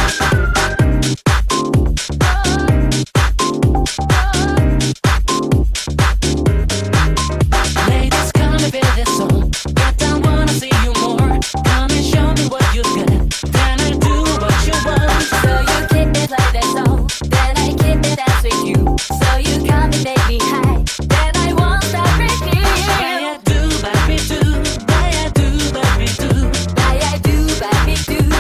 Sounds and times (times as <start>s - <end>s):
Music: 0.0s - 28.4s.